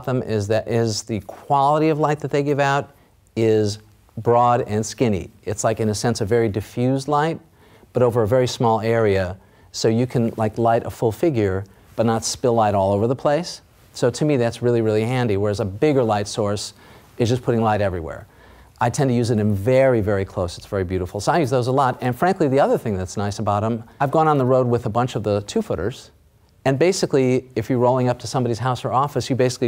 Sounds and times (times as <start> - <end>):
Speech: 0.0 - 29.6.